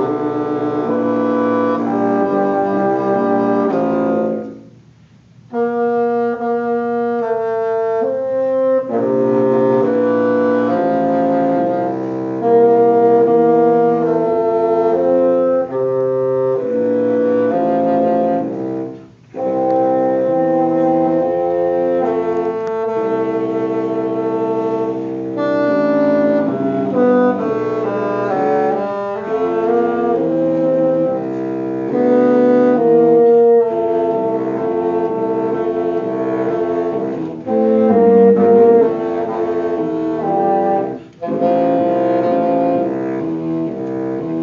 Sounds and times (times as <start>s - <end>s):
Wind instrument, woodwind instrument: 0.0s - 44.4s.